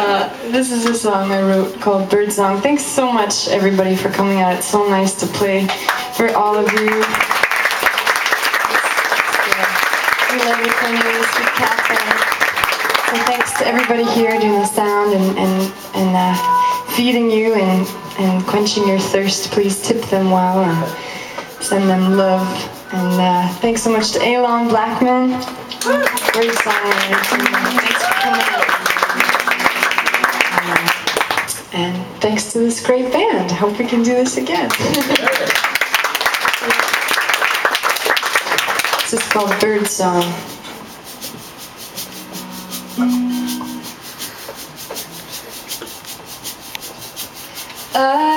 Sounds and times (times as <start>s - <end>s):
Speech: 0.0s - 7.2s, 9.4s - 12.2s, 13.1s - 20.9s, 21.6s - 28.4s, 31.7s - 35.6s, 39.1s - 40.5s, 48.0s - 48.3s.